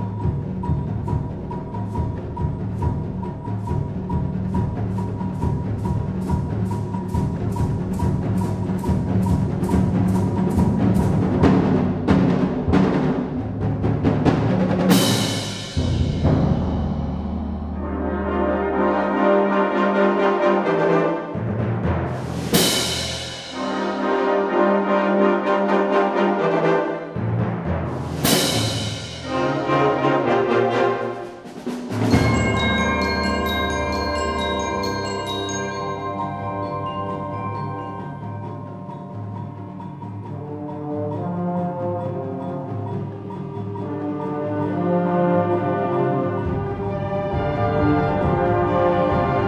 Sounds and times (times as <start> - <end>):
Orchestra: 0.0 - 49.4
Timpani: 0.0 - 49.4.